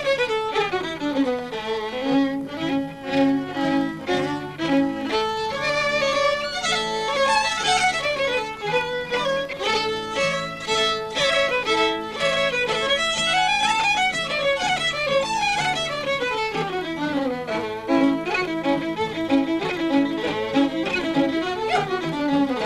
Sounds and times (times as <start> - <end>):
Violin, fiddle: 0.0 - 22.6.